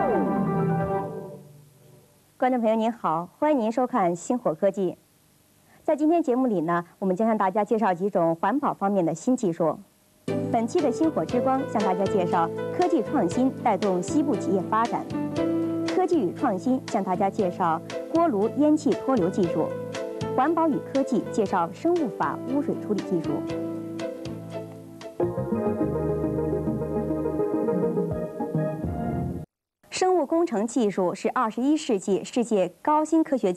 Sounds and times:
Music: 0:00.0 - 0:02.2, 0:10.2 - 0:29.5
Speech: 0:02.4 - 0:05.0, 0:05.8 - 0:09.9, 0:10.5 - 0:15.1, 0:15.9 - 0:19.8, 0:20.4 - 0:23.5, 0:29.9 - 0:33.5.

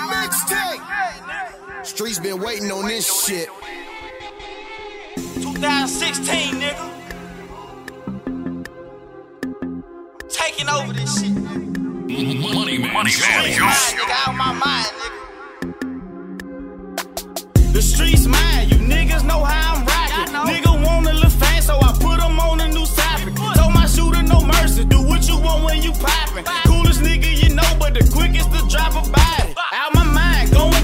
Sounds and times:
Music: 0:00.0 - 0:30.8.

